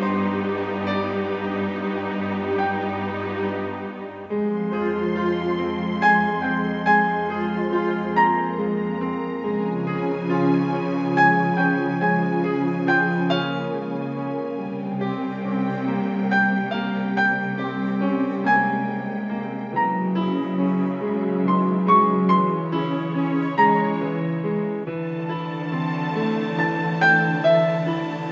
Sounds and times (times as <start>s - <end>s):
Tender music: 0.0s - 28.3s.